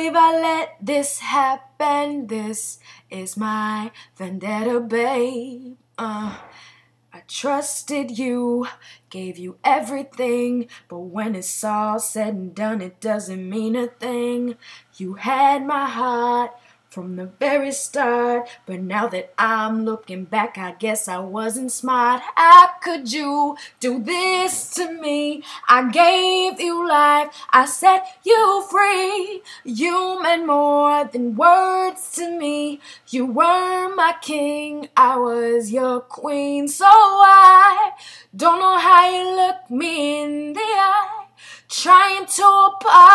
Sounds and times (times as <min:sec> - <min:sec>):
Female singing: 0:00.0 - 0:06.6, 0:07.2 - 0:43.1.